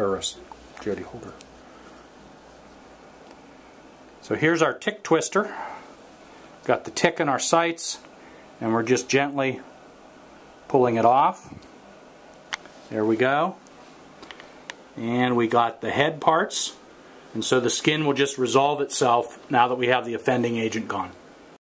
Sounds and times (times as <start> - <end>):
Speech: 0.0 - 1.5, 4.2 - 5.6, 6.6 - 9.7, 10.7 - 11.6, 12.9 - 13.6, 15.0 - 21.2.